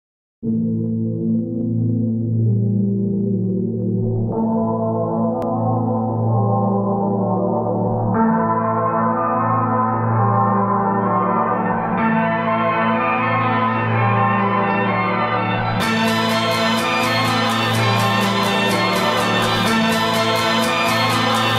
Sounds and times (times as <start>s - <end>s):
Ambient music: 0.4s - 21.5s.